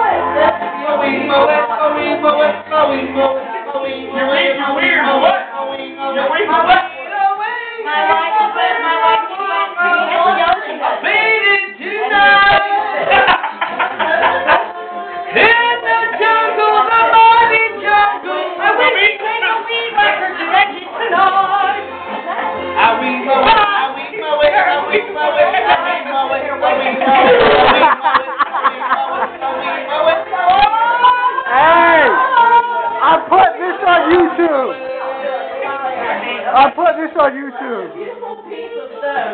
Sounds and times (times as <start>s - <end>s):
Male singing: 0.0s - 39.3s
Music: 0.0s - 39.3s.